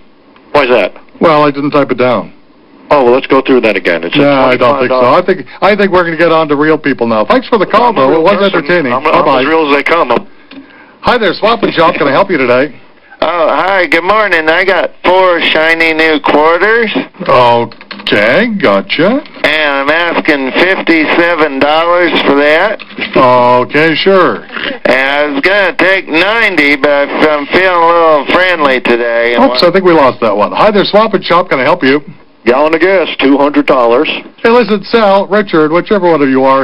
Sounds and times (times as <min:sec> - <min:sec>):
Speech: 0:00.5 - 0:10.3, 0:11.0 - 0:36.6.